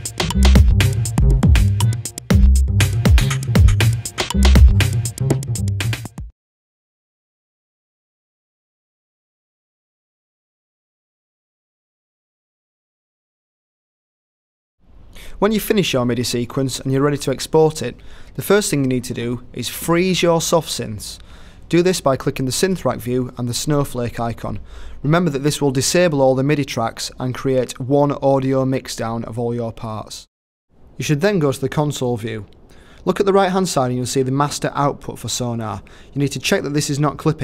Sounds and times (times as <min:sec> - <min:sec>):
Speech: 0:15.3 - 0:30.3, 0:31.0 - 0:37.4.